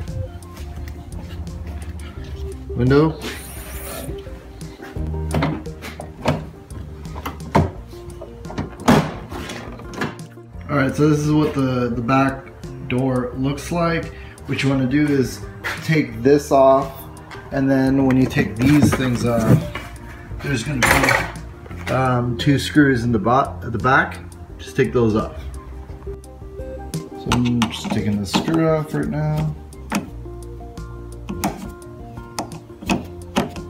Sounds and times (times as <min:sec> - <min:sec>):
Music: 0:00.0 - 0:33.7.